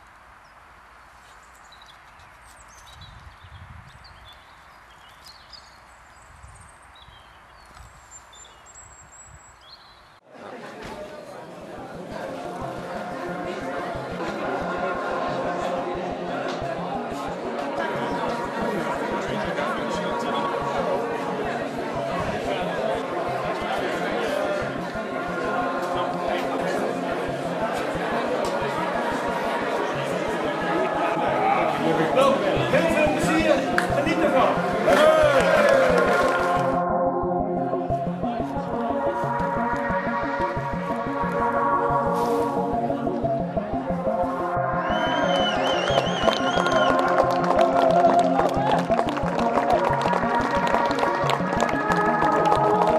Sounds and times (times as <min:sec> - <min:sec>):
Outside, urban or manmade: 0:00.0 - 0:52.9
Speech: 0:10.3 - 0:36.0
Music: 0:10.9 - 0:52.9.